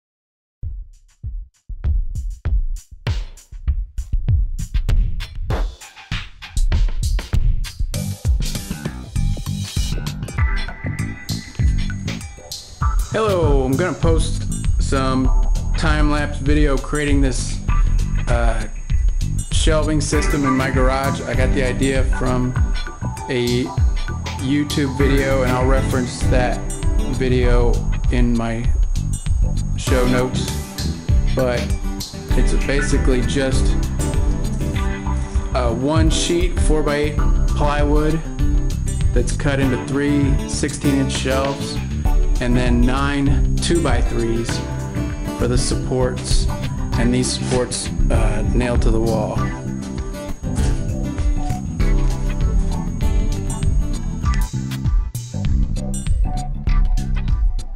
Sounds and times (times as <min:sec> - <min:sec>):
Drum machine: 0:00.6 - 0:57.7.